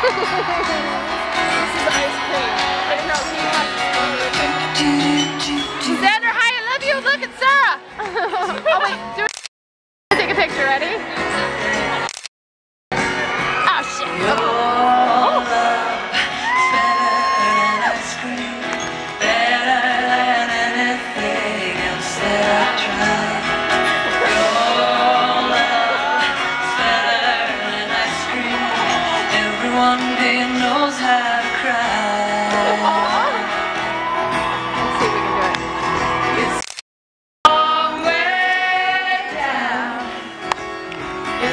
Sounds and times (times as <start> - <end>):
Inside, large room or hall: 0.0 - 9.2, 13.0 - 36.6
Music: 0.0 - 9.3, 10.1 - 12.1, 12.9 - 36.6, 37.5 - 41.5
Singing: 3.2 - 6.1, 13.8 - 33.6, 37.5 - 40.5.